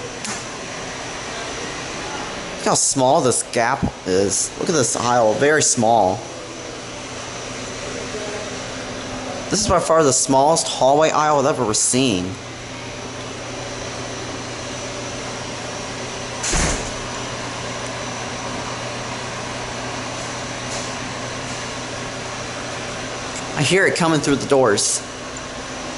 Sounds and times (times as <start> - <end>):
Speech: 1.3 - 6.5, 7.9 - 12.4, 23.5 - 25.1.